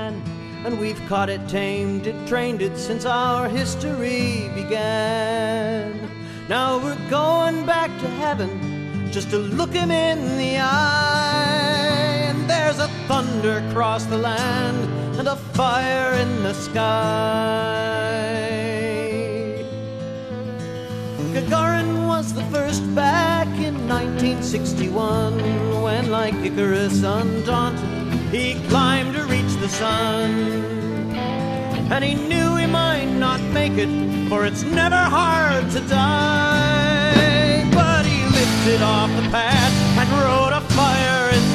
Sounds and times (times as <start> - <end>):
Music: 0.0 - 41.5.